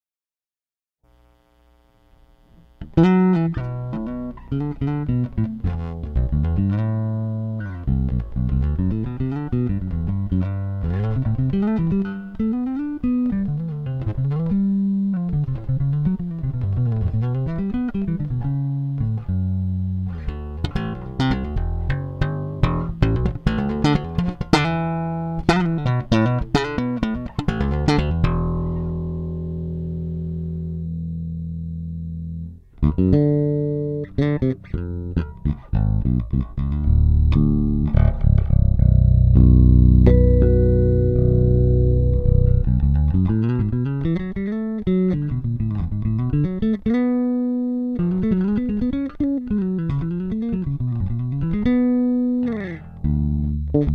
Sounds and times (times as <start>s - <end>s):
Bass guitar: 2.5s - 53.9s.